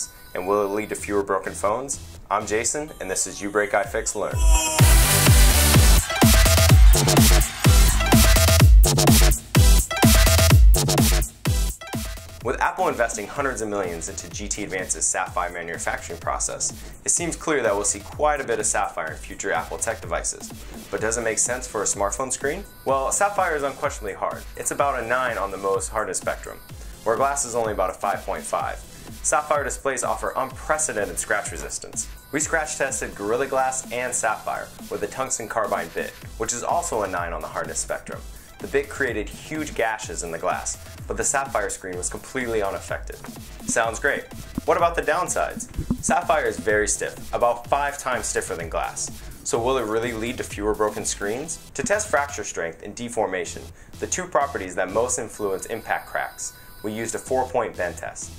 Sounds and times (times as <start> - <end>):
Male speech, man speaking: 0.0 - 4.9, 12.4 - 58.3
Music: 0.0 - 58.3.